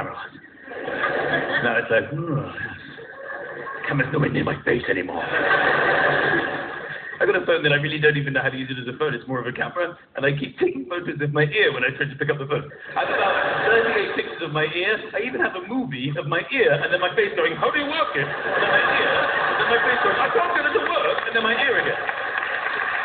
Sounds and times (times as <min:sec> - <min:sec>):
Speech: 0:00.0 - 0:00.4, 0:01.6 - 0:03.0, 0:03.8 - 0:05.2, 0:07.2 - 0:12.7, 0:13.7 - 0:18.4, 0:19.6 - 0:22.0.